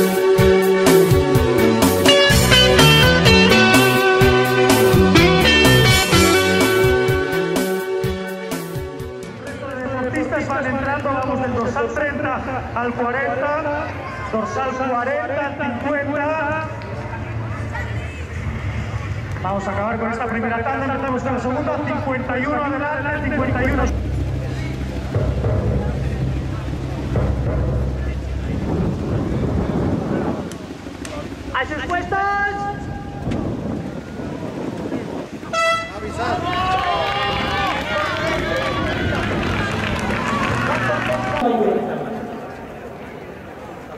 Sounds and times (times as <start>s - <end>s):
Outside, urban or manmade: 0.0s - 43.9s.